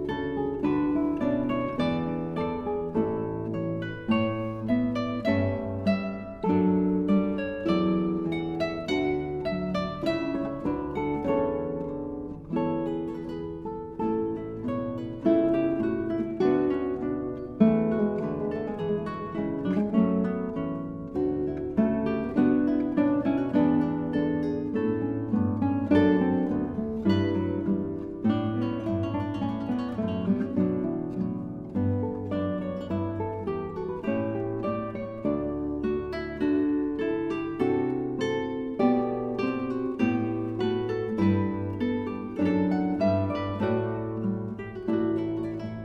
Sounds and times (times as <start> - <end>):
Acoustic guitar: 0.0 - 45.8
Strum: 0.0 - 45.8.